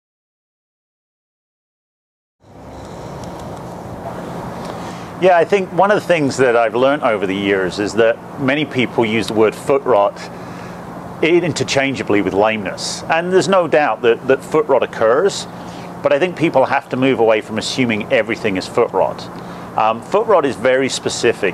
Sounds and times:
Speech: 5.2s - 10.3s, 11.2s - 21.5s.

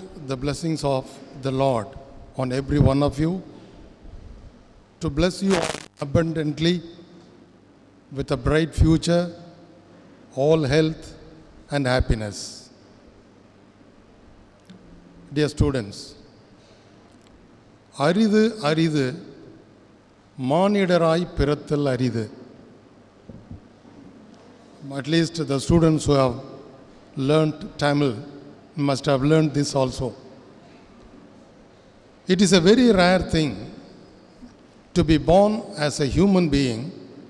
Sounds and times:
Male speech, man speaking: 0.0s - 3.5s, 5.0s - 6.9s, 8.2s - 9.4s, 10.4s - 12.7s, 15.3s - 16.2s, 18.0s - 19.3s, 20.4s - 22.4s, 24.8s - 26.6s, 27.2s - 30.2s, 32.3s - 33.8s, 35.0s - 37.0s
Narration, monologue: 0.0s - 37.3s.

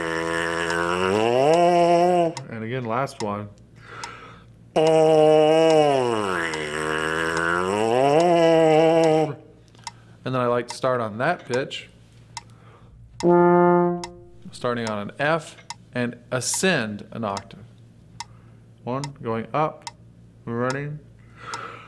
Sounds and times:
Inside, small room: 0.0s - 21.8s
Trombone: 13.2s - 14.8s.

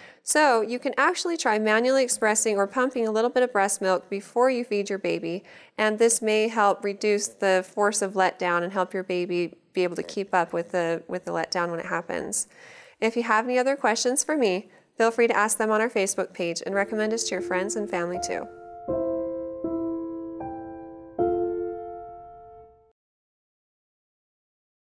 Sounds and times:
Speech: 0.3s - 18.5s
Music: 16.7s - 23.0s.

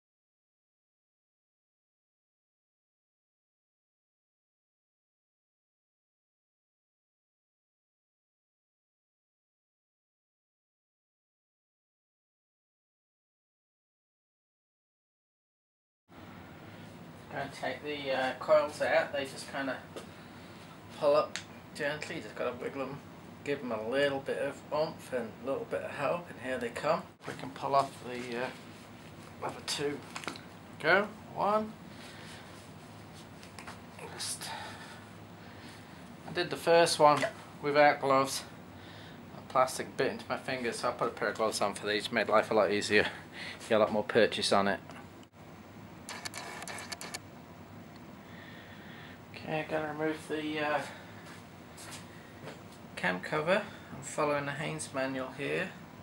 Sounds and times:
Speech: 17.3s - 19.9s, 21.0s - 28.6s, 29.4s - 30.1s, 30.8s - 31.8s, 34.0s - 34.7s, 36.3s - 38.6s, 39.4s - 44.9s, 49.4s - 51.0s, 53.0s - 55.8s.

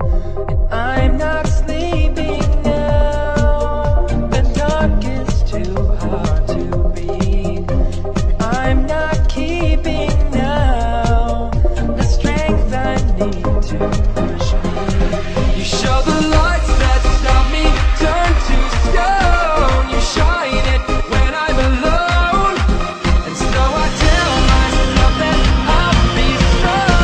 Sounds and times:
Music: 0.0s - 27.0s.

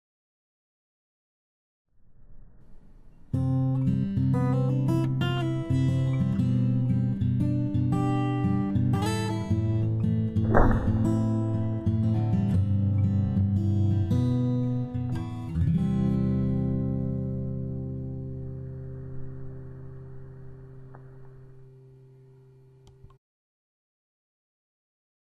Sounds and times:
Music: 2.6s - 23.2s.

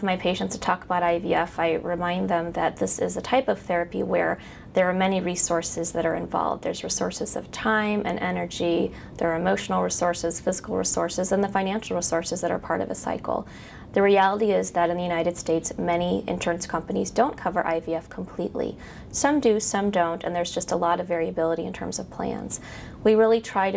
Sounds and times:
Inside, small room: 0.0s - 23.7s
Speech: 0.0s - 23.7s.

